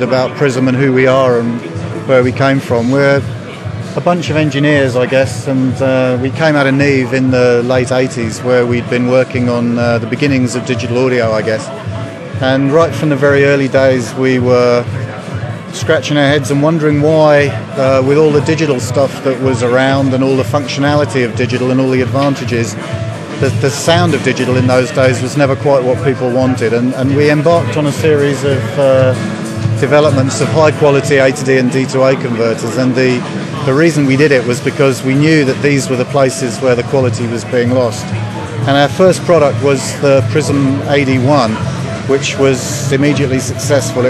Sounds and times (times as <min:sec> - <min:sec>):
Music: 0:00.0 - 0:44.0
Speech: 0:00.0 - 0:44.0.